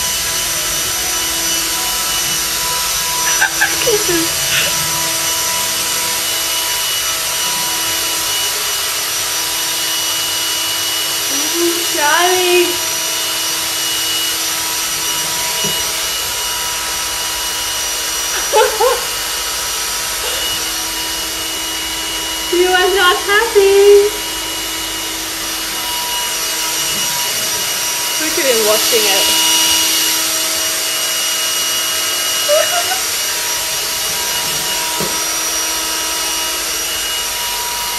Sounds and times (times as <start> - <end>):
Vacuum cleaner: 0.0 - 37.9.